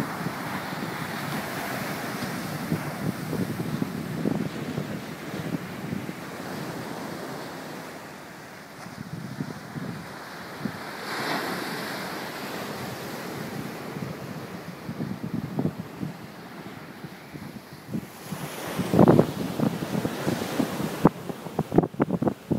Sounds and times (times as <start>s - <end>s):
Outside, rural or natural: 0.0s - 22.5s.